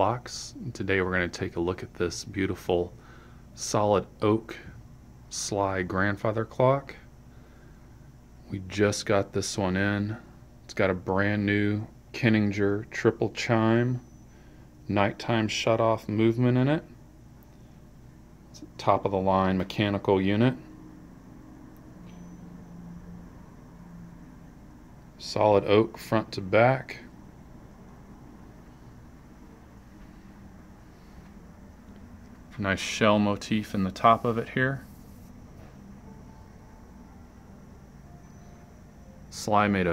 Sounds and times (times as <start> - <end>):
Speech: 0.0 - 3.0, 3.6 - 7.1, 8.4 - 14.0, 14.9 - 17.0, 18.6 - 20.7, 25.2 - 27.1, 32.5 - 34.9, 39.3 - 39.9.